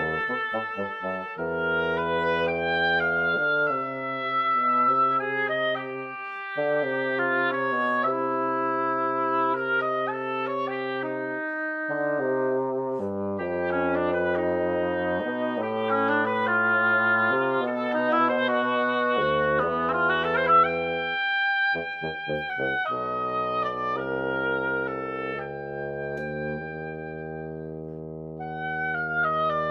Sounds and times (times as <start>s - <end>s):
Wind instrument, woodwind instrument: 0.0s - 29.7s.